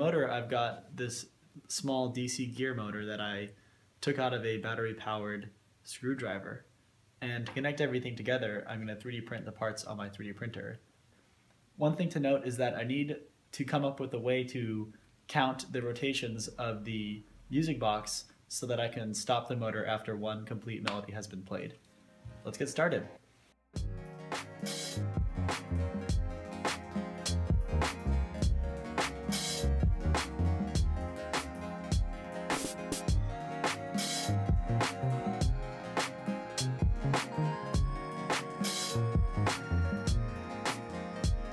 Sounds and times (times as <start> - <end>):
Speech: 0.0 - 10.8, 11.8 - 21.8, 22.4 - 23.2
Music: 22.1 - 41.5.